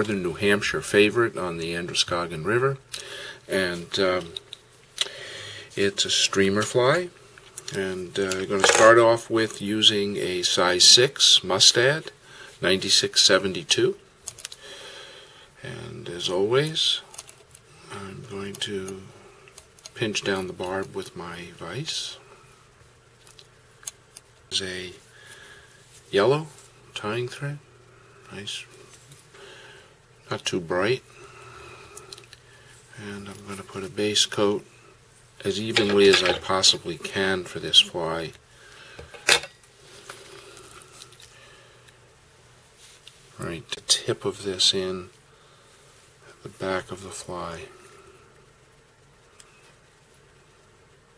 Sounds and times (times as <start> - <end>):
Speech: 0.0 - 2.9, 3.5 - 4.4, 5.8 - 14.0, 15.6 - 17.1, 17.9 - 19.2, 20.0 - 22.2, 24.5 - 25.0, 26.1 - 27.6, 28.3 - 28.8, 30.3 - 31.1, 33.0 - 34.7, 35.4 - 38.4, 43.4 - 45.2, 46.3 - 47.8.